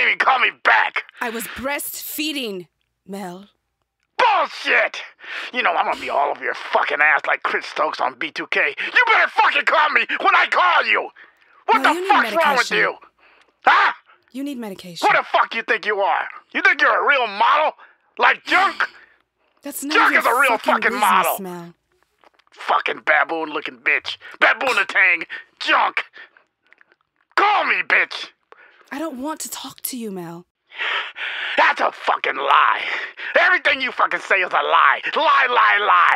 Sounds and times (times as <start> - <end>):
Speech: 0.0 - 3.5, 4.5 - 13.0, 14.4 - 19.0, 19.7 - 21.8, 22.6 - 26.2, 27.4 - 28.3, 28.9 - 30.4, 31.6 - 36.1.